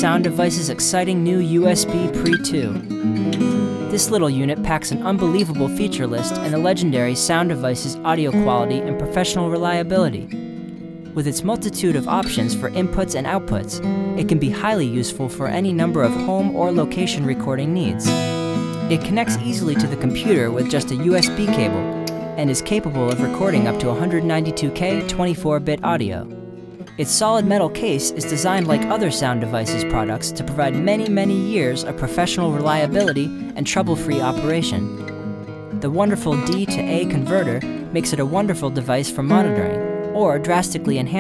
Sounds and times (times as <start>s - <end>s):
Speech: 0.0s - 2.9s, 3.9s - 10.3s, 11.2s - 18.1s, 18.8s - 26.3s, 27.0s - 34.9s, 35.8s - 41.2s
Acoustic guitar: 0.0s - 41.2s.